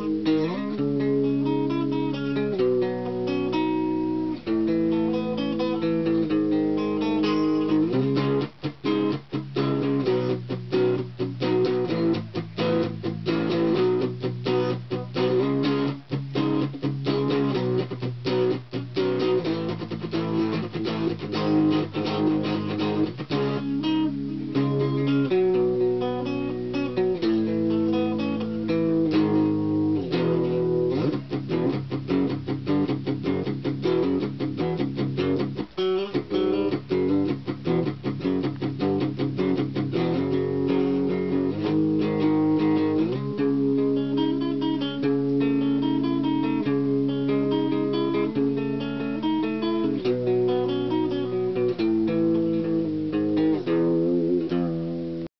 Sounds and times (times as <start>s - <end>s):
Guitar: 0.0s - 55.3s.